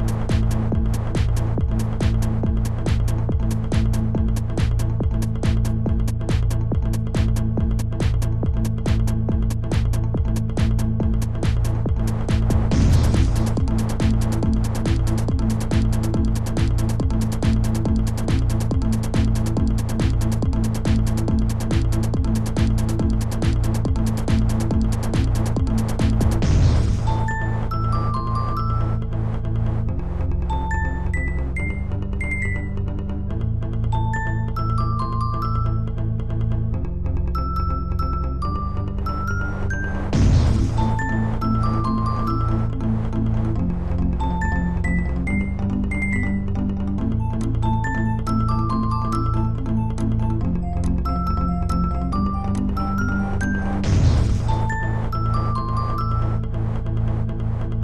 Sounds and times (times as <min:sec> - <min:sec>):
Music: 0:00.0 - 0:57.8.